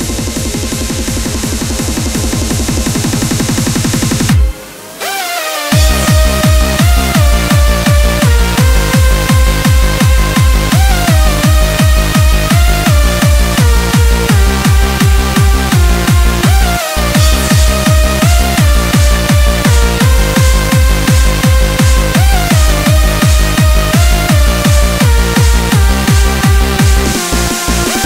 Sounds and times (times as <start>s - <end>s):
Dubstep: 0.0s - 28.0s.